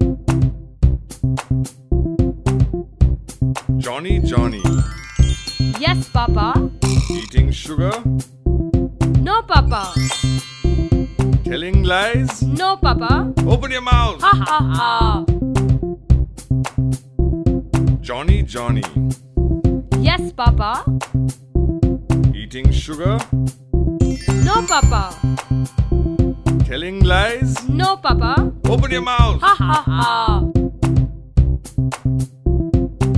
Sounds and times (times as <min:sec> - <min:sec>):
Music for children: 0:03.7 - 0:15.8, 0:23.9 - 0:31.0
Child speech, kid speaking: 0:05.8 - 0:06.7, 0:09.3 - 0:10.0, 0:12.5 - 0:13.3, 0:14.2 - 0:15.3, 0:20.0 - 0:20.9, 0:24.4 - 0:25.2, 0:27.6 - 0:28.5, 0:29.4 - 0:30.4.